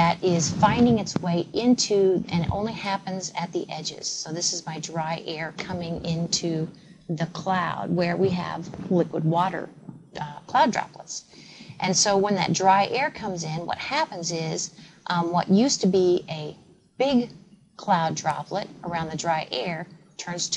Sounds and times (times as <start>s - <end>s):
Inside, small room: 0.0s - 20.5s
Speech: 0.0s - 20.5s.